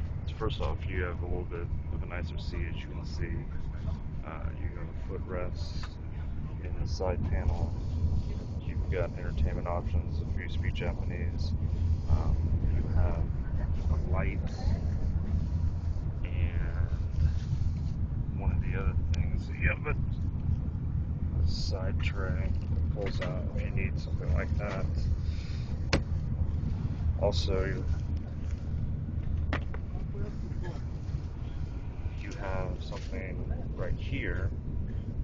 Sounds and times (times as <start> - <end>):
Speech: 0.3 - 6.0, 6.6 - 11.5, 12.1 - 14.9, 16.2 - 17.1, 18.4 - 20.0, 21.4 - 25.1, 27.2 - 27.9, 32.2 - 34.5.